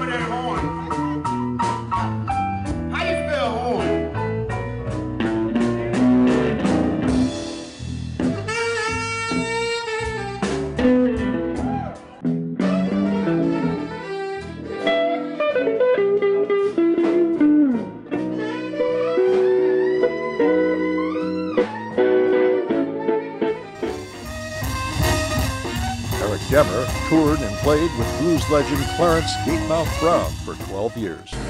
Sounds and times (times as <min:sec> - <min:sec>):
Blues: 0:00.0 - 0:31.4
Musical instrument: 0:23.7 - 0:31.4.